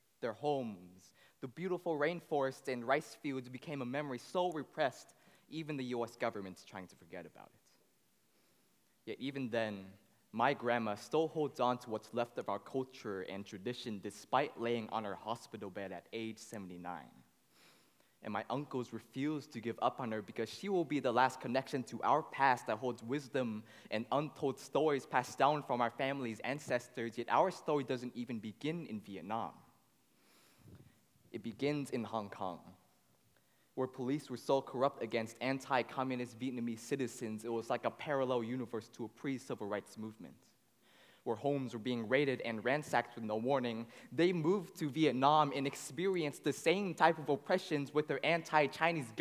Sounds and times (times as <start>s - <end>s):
Speech: 0.2s - 7.8s, 9.0s - 17.2s, 18.2s - 29.7s, 31.3s - 32.8s, 33.8s - 40.6s, 41.3s - 49.2s.